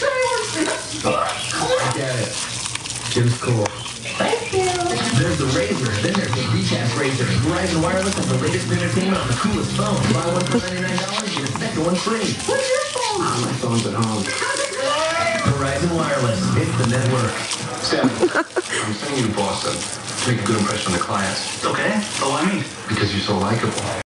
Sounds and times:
Speech: 3.1 - 18.2, 18.8 - 24.0.

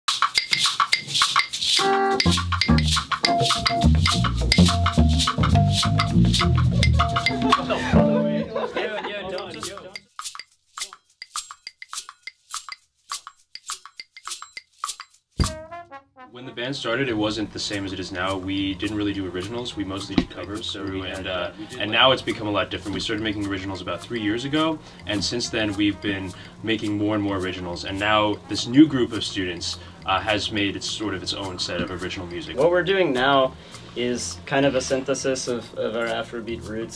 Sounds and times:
Music: 0.1 - 36.9
Speech: 7.6 - 10.0, 16.3 - 36.9.

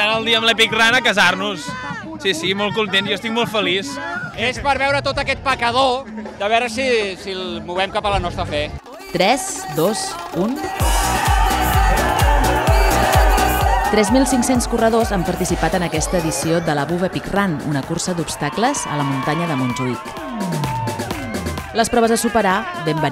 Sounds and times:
Music: 0.0 - 23.1.

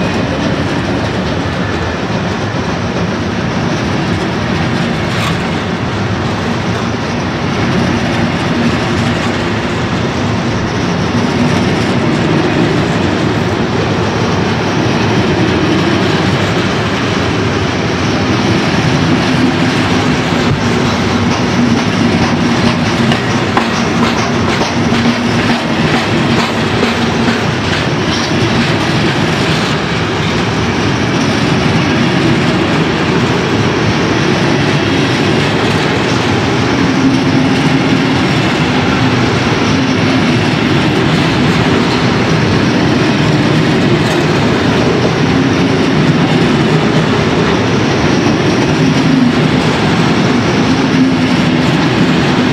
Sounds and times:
Clickety-clack: 0.0 - 52.5
Railroad car, train wagon: 0.0 - 52.5
Train: 0.0 - 52.5.

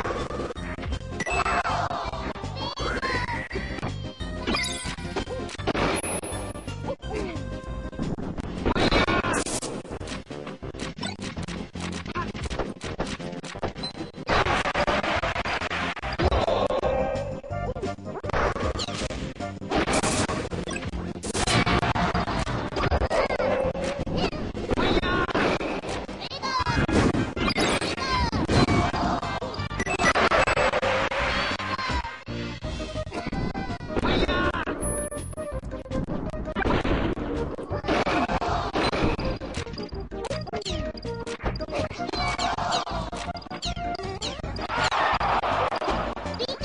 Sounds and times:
Smash, crash: 10.9 - 16.8, 18.3 - 31.7, 36.5 - 39.8.

